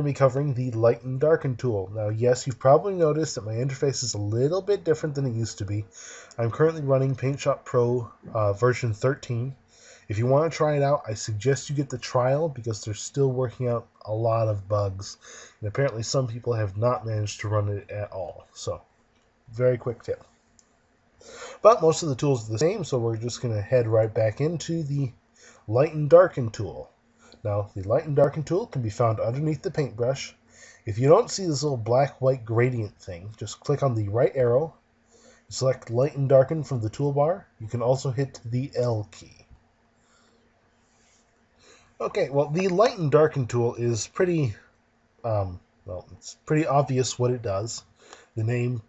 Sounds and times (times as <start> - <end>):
Speech: 0.0 - 18.8, 19.5 - 20.3, 21.4 - 34.8, 35.5 - 39.5, 42.0 - 48.8.